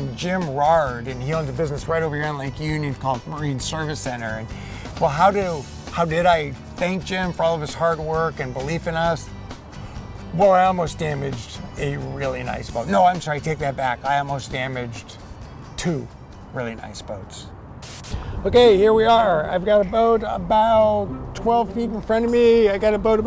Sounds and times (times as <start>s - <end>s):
Music: 0.0s - 23.2s
Speech: 18.4s - 23.2s.